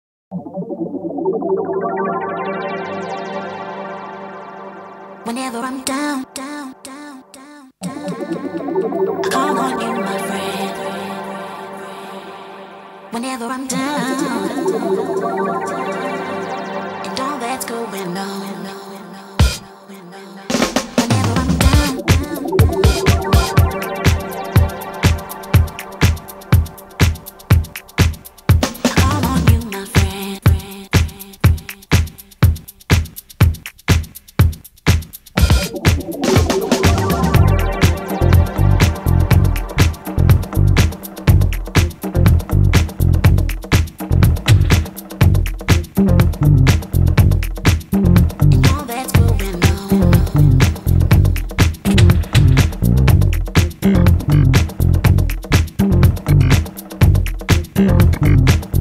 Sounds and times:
Music: 0:00.5 - 0:07.2, 0:07.8 - 0:58.8.

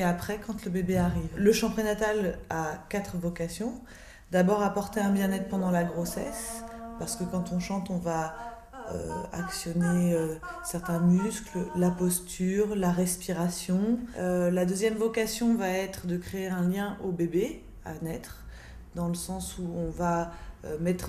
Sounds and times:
Speech: 0:00.0 - 0:18.4, 0:19.0 - 0:21.0.

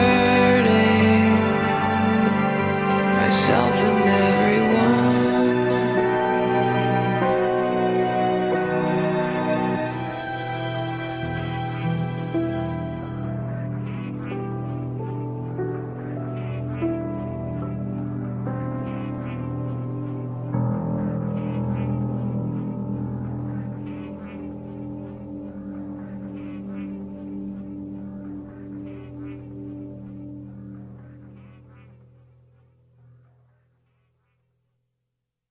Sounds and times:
Music: 0:00.0 - 0:33.7.

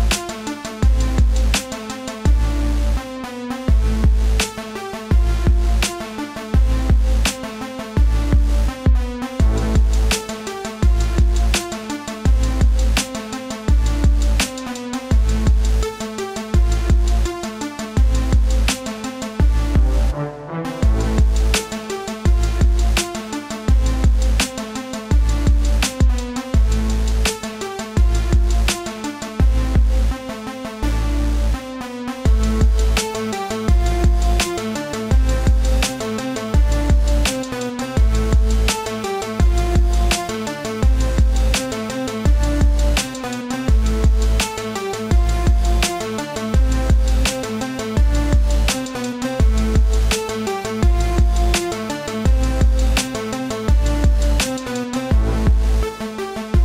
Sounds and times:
Music: 0:00.0 - 0:56.6.

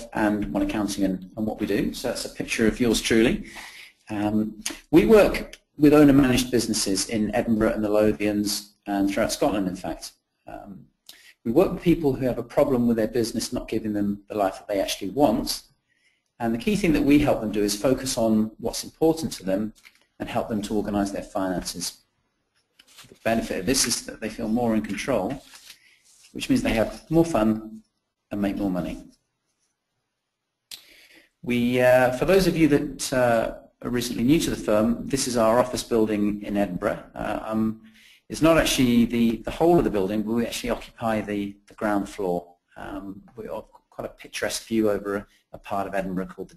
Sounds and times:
Speech: 0:00.0 - 0:10.8, 0:11.4 - 0:15.7, 0:16.4 - 0:22.0, 0:23.2 - 0:25.7, 0:26.3 - 0:29.1, 0:31.4 - 0:46.5.

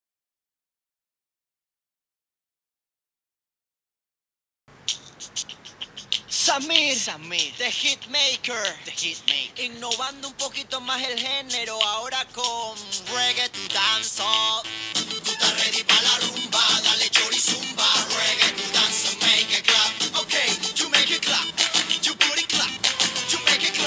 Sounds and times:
Speech: 0:06.3 - 0:09.8
Singing: 0:06.3 - 0:23.8
Music: 0:07.4 - 0:23.8.

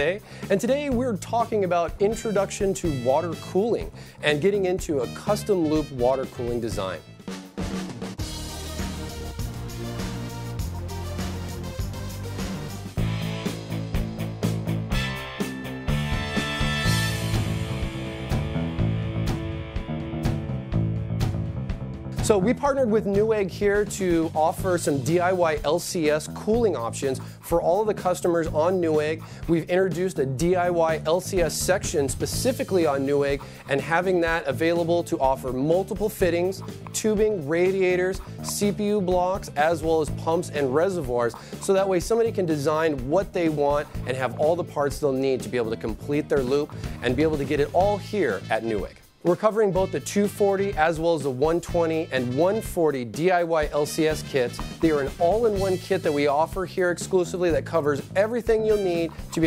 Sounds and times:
Speech: 0:00.0 - 0:07.0, 0:22.2 - 0:59.4
Music: 0:00.0 - 0:59.4.

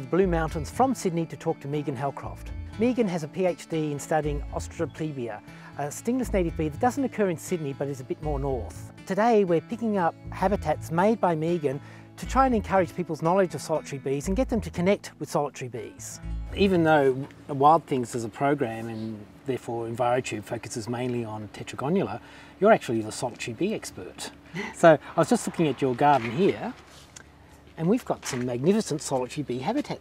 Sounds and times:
Music: 0:00.0 - 0:24.3
Speech: 0:00.0 - 0:26.8, 0:27.8 - 0:30.0.

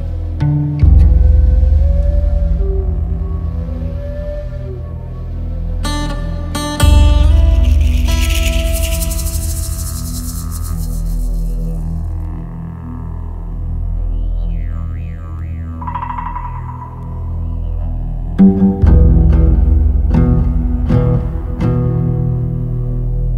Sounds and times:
Music: 0:00.0 - 0:23.3.

